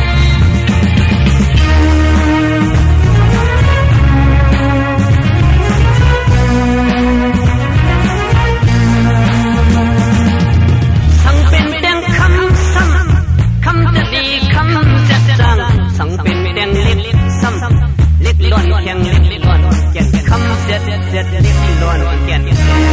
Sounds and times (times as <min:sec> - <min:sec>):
Music: 0:00.0 - 0:22.9.